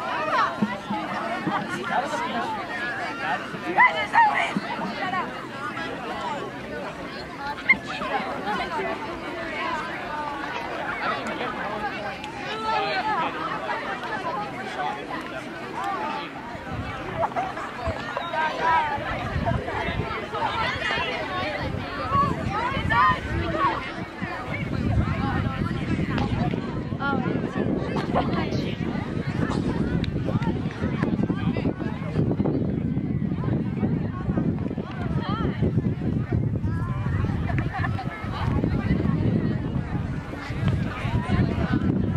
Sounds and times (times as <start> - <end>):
Outside, rural or natural: 0.0 - 42.1
Speech: 0.0 - 42.1.